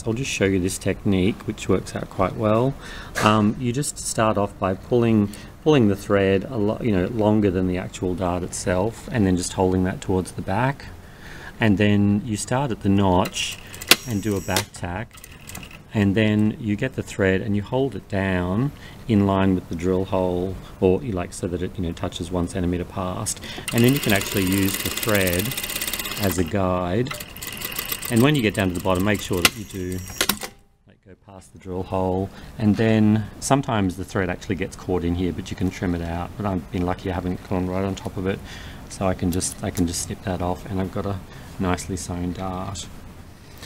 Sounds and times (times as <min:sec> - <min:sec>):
Speech: 0:00.0 - 0:11.0, 0:11.6 - 0:15.1, 0:15.9 - 0:25.6, 0:26.2 - 0:27.2, 0:28.1 - 0:30.1, 0:30.9 - 0:43.0
Sewing machine: 0:13.6 - 0:15.8, 0:23.7 - 0:26.5, 0:27.1 - 0:30.6.